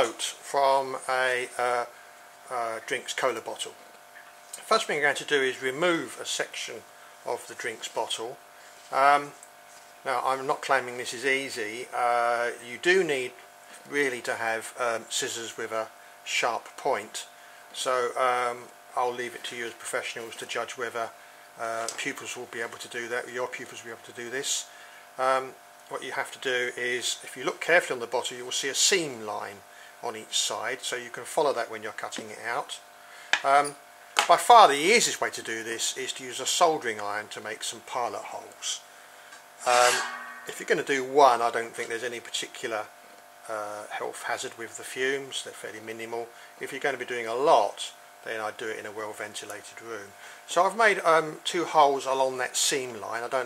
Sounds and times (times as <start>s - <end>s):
Speech: 0.0s - 1.9s, 2.5s - 3.8s, 4.6s - 9.4s, 10.0s - 32.8s, 33.4s - 38.8s, 39.6s - 53.4s.